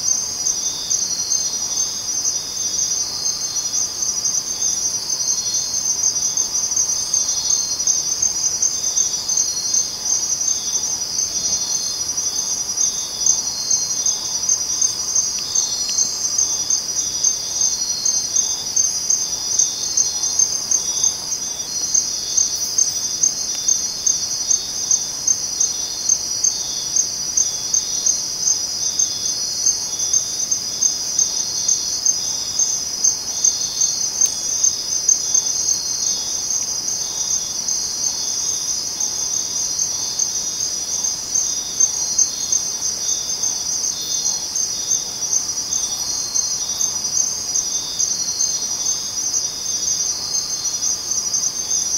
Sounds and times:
Cricket: 0.0s - 51.9s.

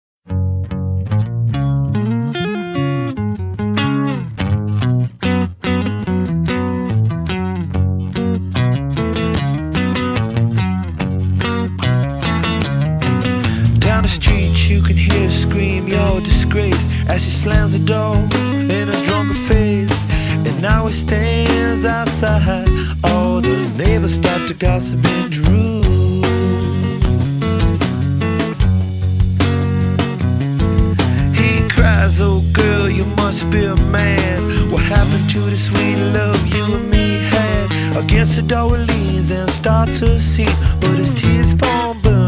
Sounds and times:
Bass guitar: 0.2s - 42.2s
Electronic tuner: 0.2s - 42.2s.

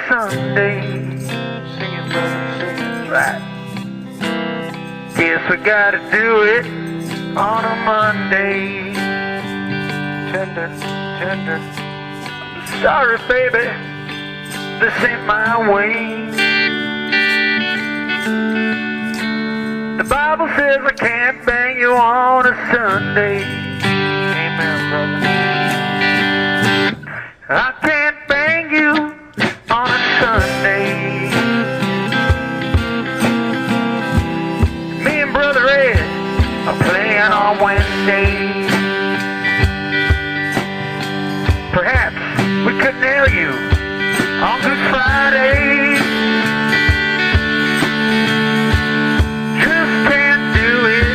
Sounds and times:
Music: 0.0s - 51.1s.

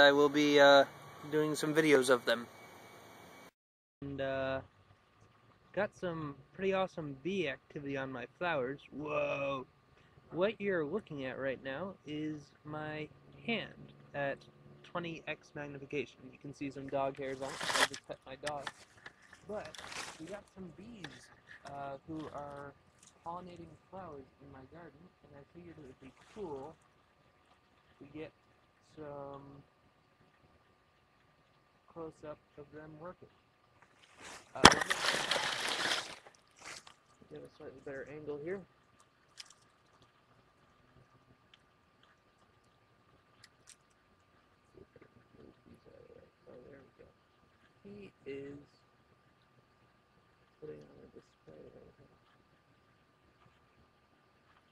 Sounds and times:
Speech: 0.0s - 2.5s, 4.0s - 4.6s, 5.8s - 9.6s, 10.4s - 18.7s, 19.5s - 22.7s, 23.3s - 26.8s, 28.0s - 28.3s, 29.0s - 29.6s, 31.9s - 33.3s, 34.6s - 35.5s, 37.2s - 38.7s, 44.8s - 47.1s, 47.9s - 48.7s, 50.6s - 52.1s.

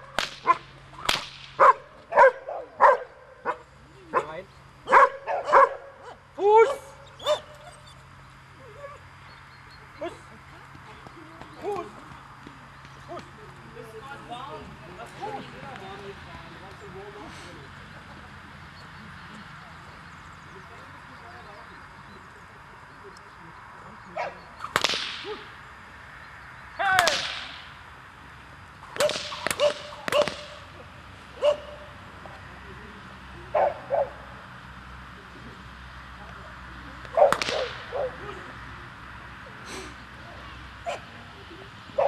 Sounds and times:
Speech: 13.0s - 24.5s.

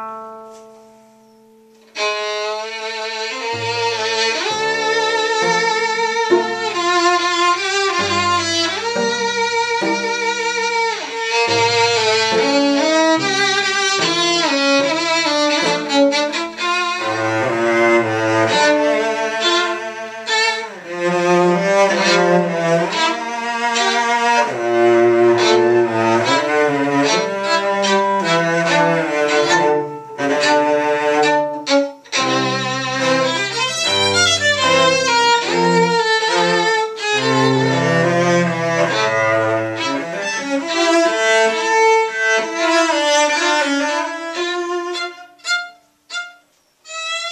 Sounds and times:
Cello: 0.0s - 47.3s
Violin, fiddle: 1.8s - 47.3s.

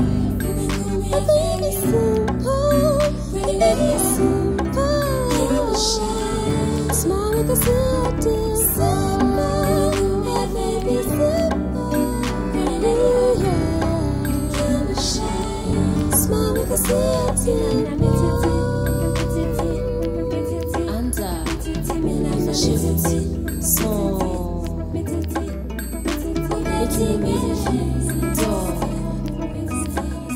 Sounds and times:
Music: 0.0s - 30.3s.

